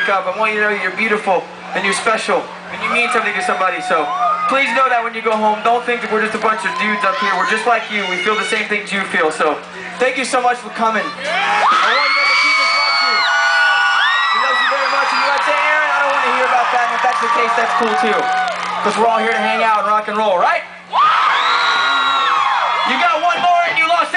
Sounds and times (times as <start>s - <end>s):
Male speech, man speaking: 0.0s - 11.2s, 11.8s - 13.2s, 14.4s - 20.7s, 22.8s - 24.1s.